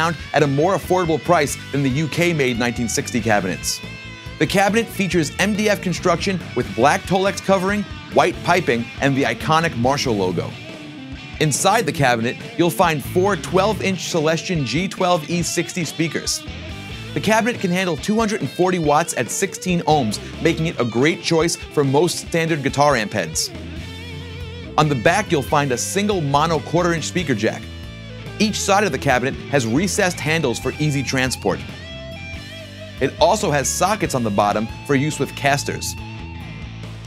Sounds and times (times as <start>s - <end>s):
Speech: 0.0s - 3.8s, 4.4s - 10.6s, 11.4s - 16.4s, 17.2s - 23.5s, 24.8s - 27.7s, 28.4s - 31.7s, 33.0s - 36.0s
Music: 0.0s - 37.0s.